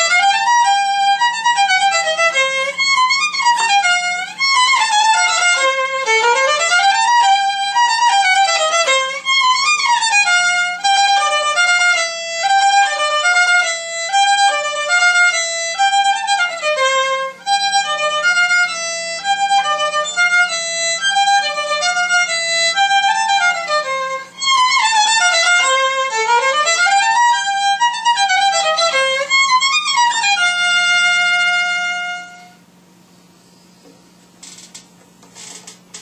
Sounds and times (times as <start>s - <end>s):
Violin, fiddle: 0.0s - 32.6s.